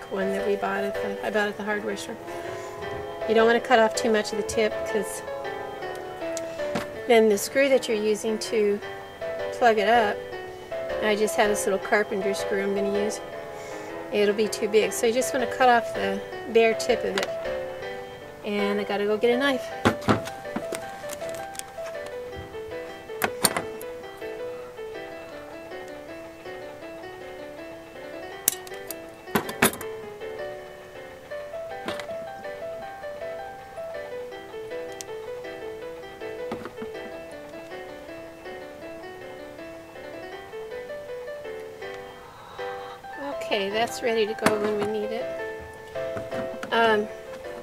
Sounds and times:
Music: 0.0s - 47.6s
Outside, urban or manmade: 0.0s - 47.6s.

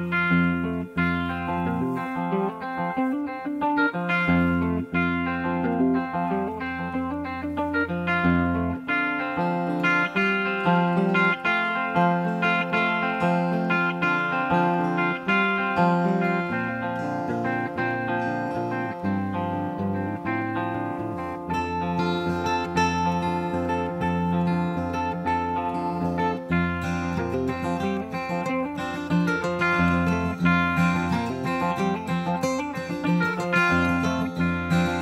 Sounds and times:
Guitar: 0.0s - 35.0s.

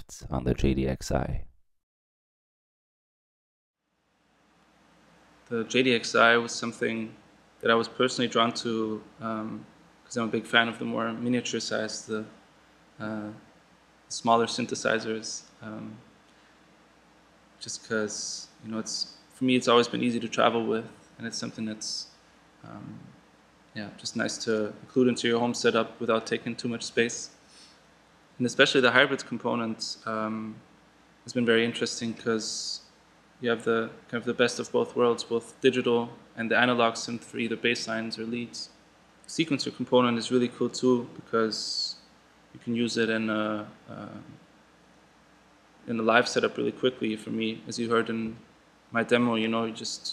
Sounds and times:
Speech: 0.0s - 1.5s, 5.5s - 12.4s, 13.0s - 13.4s, 14.1s - 16.0s, 17.6s - 23.1s, 23.8s - 27.3s, 28.4s - 30.6s, 31.3s - 32.8s, 33.4s - 38.7s, 39.3s - 42.0s, 42.6s - 44.4s, 45.9s - 48.4s, 49.0s - 50.1s.

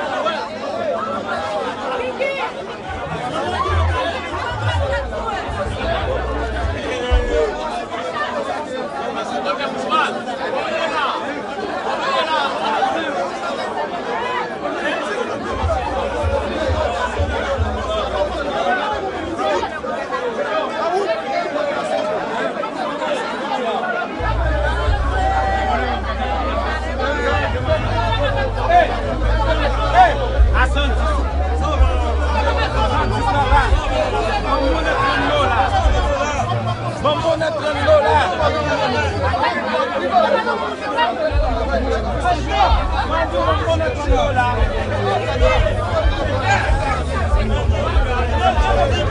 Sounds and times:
Speech: 0.0s - 49.1s
Music: 2.9s - 8.0s, 15.4s - 19.4s, 24.2s - 39.5s, 41.3s - 49.1s.

